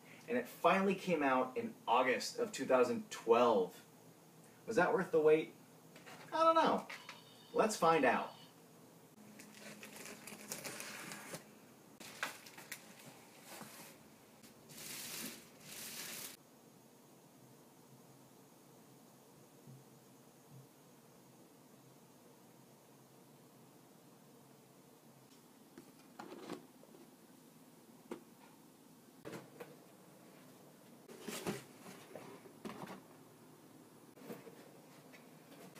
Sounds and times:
Inside, small room: 0.0 - 35.7.

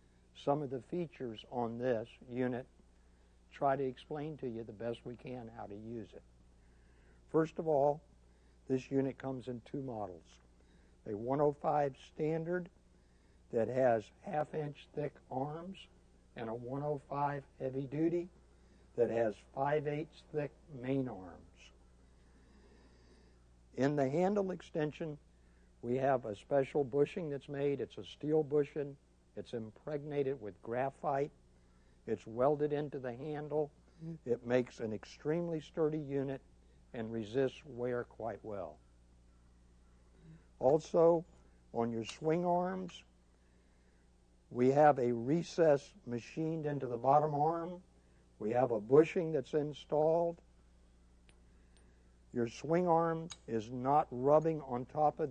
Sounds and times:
Speech: 0.4 - 2.7, 3.5 - 6.3, 7.3 - 8.1, 8.7 - 10.4, 11.1 - 12.7, 13.5 - 18.4, 19.0 - 21.8, 23.8 - 25.2, 25.8 - 31.4, 32.1 - 36.4, 37.0 - 38.8, 40.3 - 43.1, 44.6 - 50.4, 52.4 - 55.3.

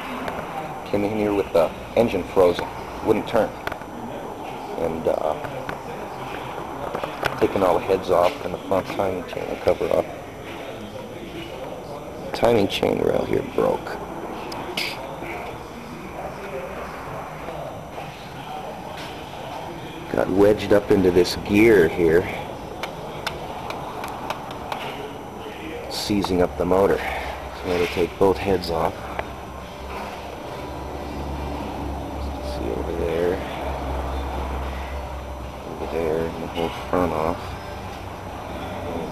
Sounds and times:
Speech: 0.0 - 22.6, 24.8 - 29.2, 32.2 - 33.8, 35.7 - 37.5, 38.7 - 39.1.

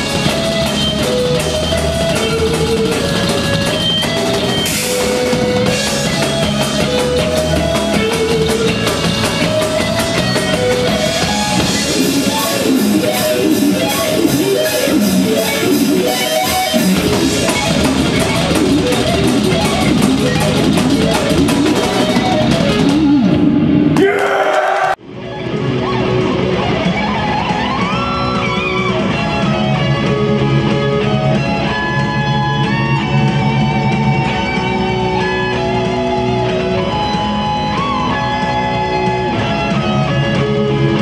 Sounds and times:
Electric guitar: 0.0 - 41.0.

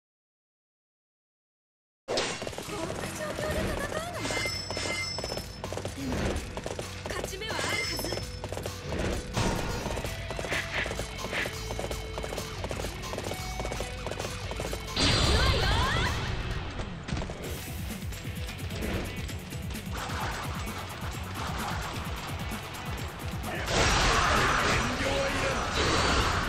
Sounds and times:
Music: 2.6 - 26.4
Speech: 7.1 - 8.2, 23.5 - 25.8.

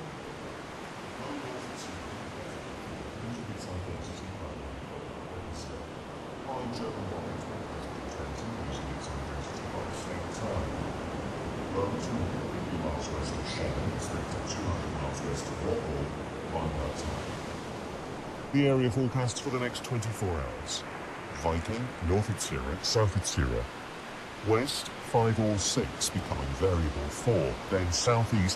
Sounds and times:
Speech: 1.2 - 11.0, 11.7 - 17.4, 18.5 - 23.7, 24.4 - 28.5.

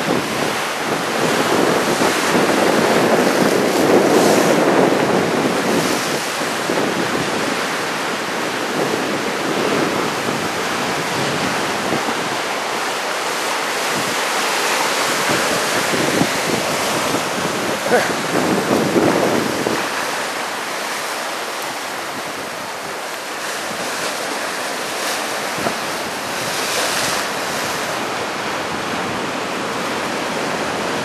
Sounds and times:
Wind noise (microphone): 0.0 - 13.0, 13.7 - 21.1, 22.0 - 31.0
Waves, surf: 0.0 - 31.0.

